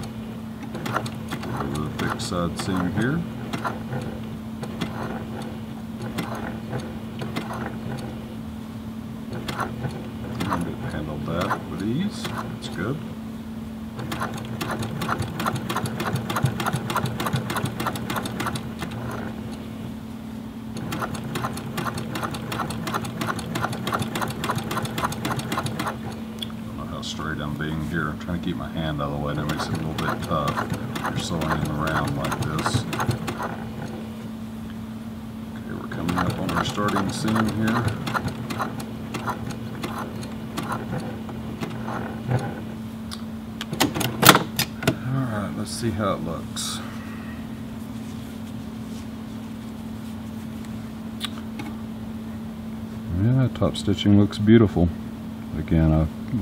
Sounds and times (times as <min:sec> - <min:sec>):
Sewing machine: 0:00.0 - 0:08.2, 0:09.3 - 0:12.6, 0:14.0 - 0:19.5, 0:20.8 - 0:26.2, 0:29.3 - 0:34.0, 0:35.9 - 0:42.6
Speech: 0:01.5 - 0:03.3, 0:10.4 - 0:13.1, 0:26.7 - 0:32.9, 0:35.6 - 0:38.0, 0:45.0 - 0:46.9, 0:53.1 - 0:56.4.